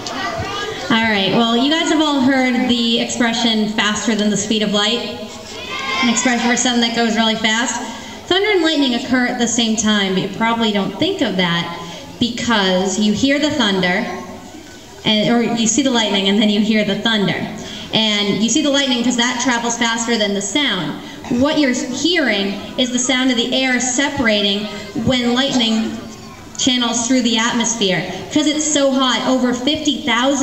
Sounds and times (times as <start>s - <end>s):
Speech: 0.0s - 5.2s, 15.0s - 30.4s.